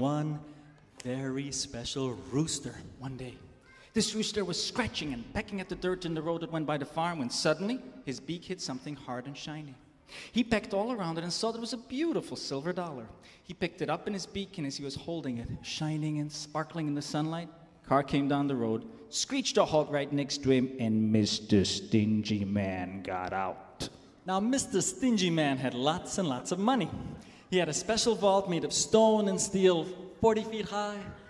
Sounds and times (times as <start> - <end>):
Speech: 0.0 - 31.2.